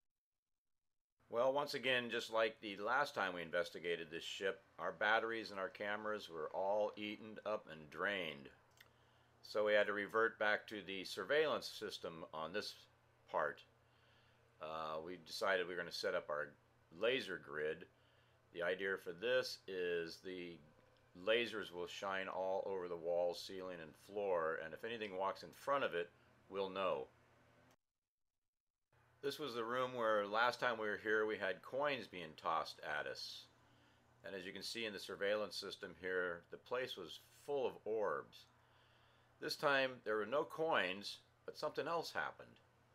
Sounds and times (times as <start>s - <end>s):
Speech: 1.3s - 8.6s, 9.4s - 13.7s, 14.6s - 17.9s, 18.6s - 27.1s, 29.2s - 33.5s, 34.2s - 38.5s, 39.4s - 42.6s.